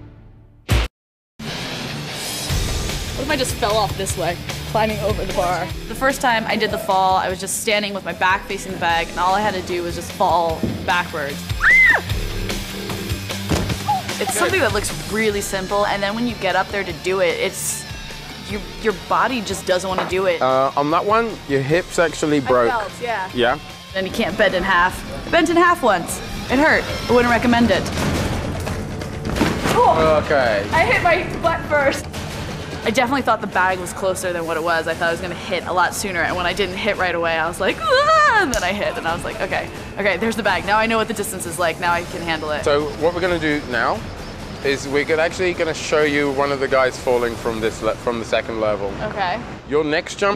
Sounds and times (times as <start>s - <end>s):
Music: 0.0s - 49.4s.